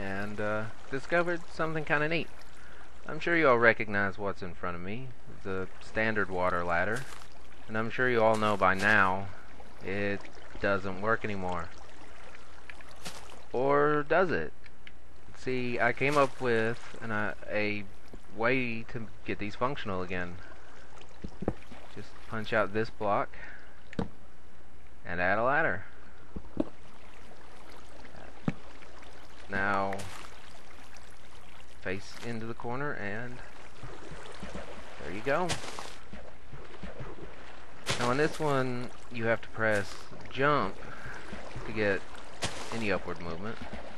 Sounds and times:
Speech: 0.0 - 2.3, 3.1 - 7.1, 7.7 - 11.7, 13.5 - 14.5, 15.4 - 20.5, 22.0 - 23.6, 25.1 - 25.9, 29.5 - 30.1, 31.8 - 33.4, 35.0 - 35.6, 37.9 - 40.8, 41.6 - 42.0, 42.6 - 43.6.

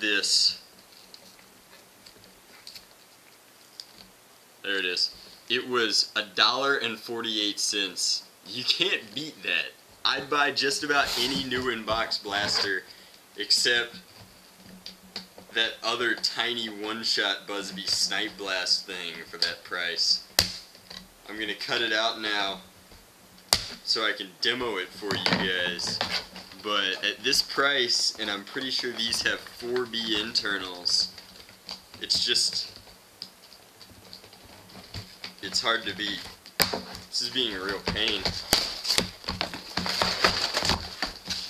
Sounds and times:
Speech: 0.0 - 0.6, 4.6 - 14.0, 15.5 - 20.3, 21.3 - 22.7, 23.8 - 26.0, 26.6 - 31.1, 32.0 - 32.8, 35.4 - 36.3, 37.1 - 38.4.

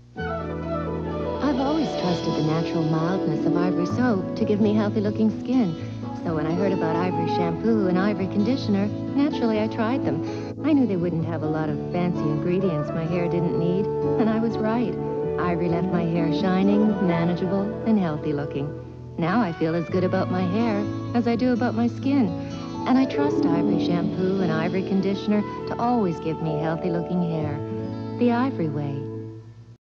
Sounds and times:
Music: 0.0 - 29.8
Speech: 1.4 - 29.1.

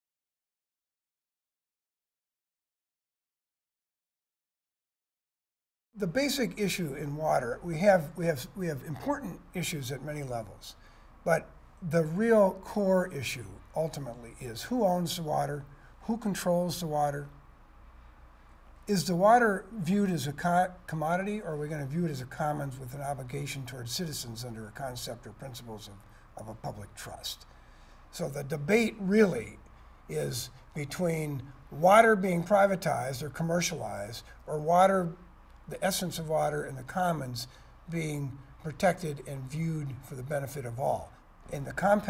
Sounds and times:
Speech: 6.0 - 17.4, 18.9 - 27.5, 28.1 - 42.0.

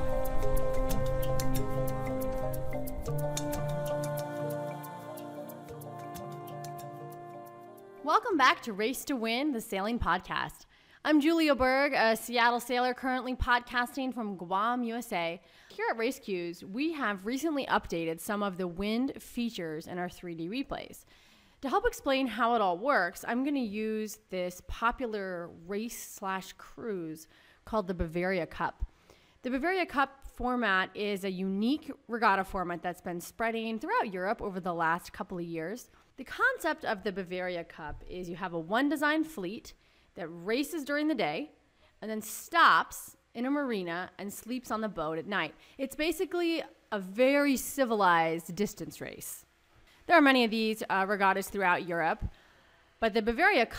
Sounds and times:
Speech: 8.0 - 21.0, 21.6 - 28.8, 29.4 - 49.5, 50.1 - 52.3, 53.0 - 53.7.

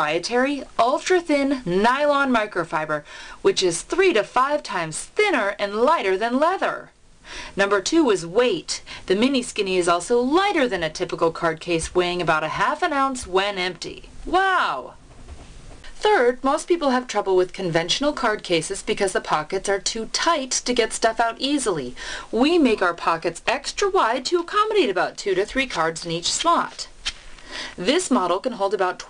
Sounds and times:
Speech: 0.0 - 6.9, 7.6 - 15.0, 16.0 - 26.9, 27.8 - 29.0.

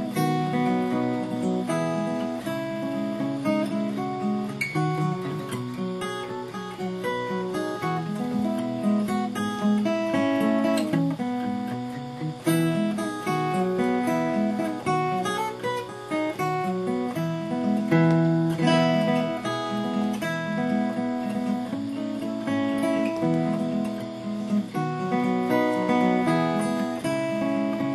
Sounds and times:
Music: 0.0 - 27.9.

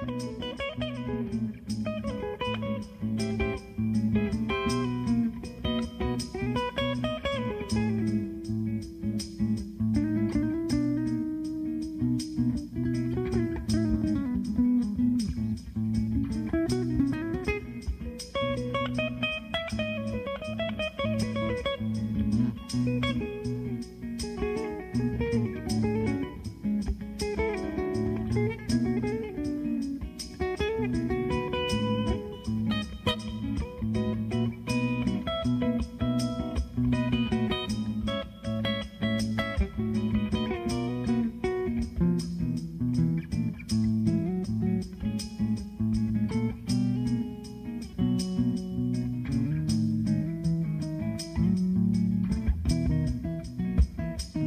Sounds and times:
Acoustic guitar: 0.0 - 54.4
Strum: 0.0 - 54.4.

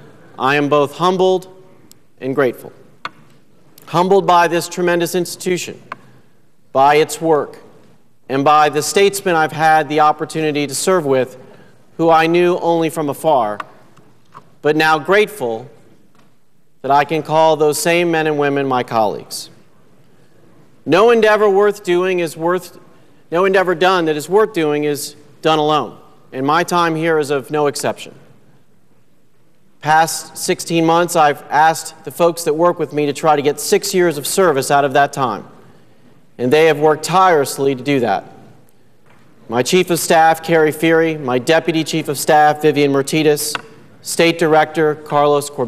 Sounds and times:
Narration, monologue: 0.0 - 45.6
Male speech, man speaking: 0.4 - 1.6, 2.2 - 2.8, 3.9 - 5.8, 6.8 - 7.6, 8.3 - 11.4, 12.0 - 13.6, 14.7 - 15.7, 16.9 - 19.6, 20.9 - 22.8, 23.4 - 28.2, 29.8 - 35.5, 36.4 - 38.4, 39.5 - 45.6.

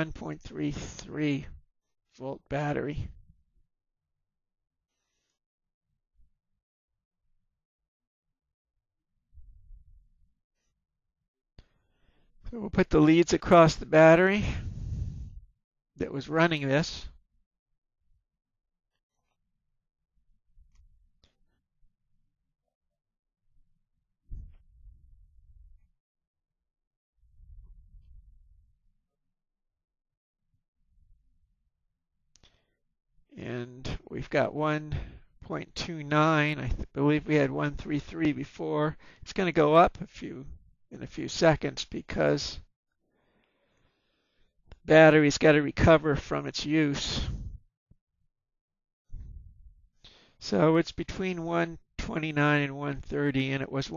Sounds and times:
Speech: 0.0 - 1.6, 2.2 - 3.2, 12.5 - 14.7, 16.0 - 17.2, 33.4 - 42.7, 44.8 - 47.5, 50.4 - 53.9.

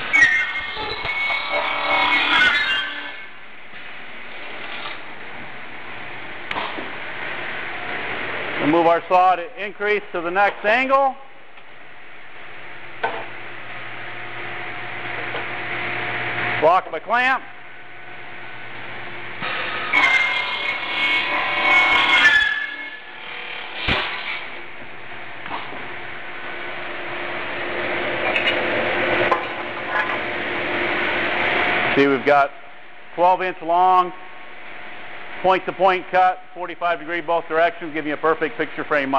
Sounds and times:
Speech: 8.6 - 11.3, 16.6 - 17.5, 32.0 - 32.6, 33.2 - 34.2, 35.4 - 39.1.

